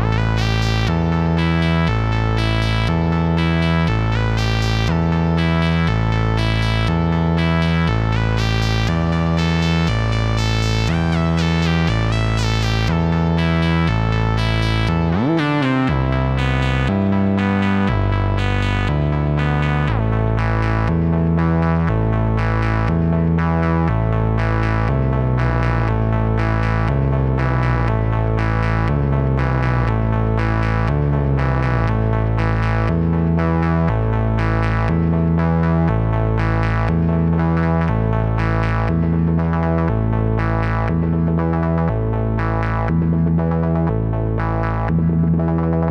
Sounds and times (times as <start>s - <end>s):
Harmonic: 0.0s - 45.9s
Music: 0.0s - 45.9s.